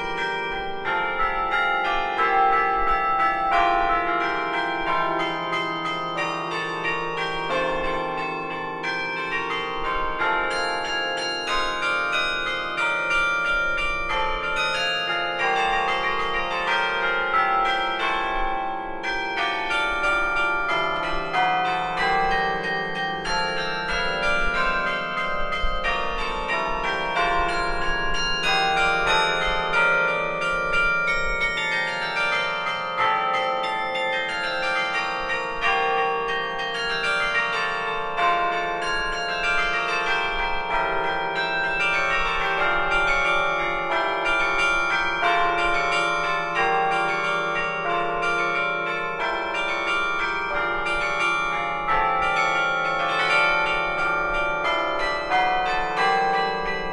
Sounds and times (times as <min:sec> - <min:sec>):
Change ringing (campanology): 0:00.0 - 0:56.9.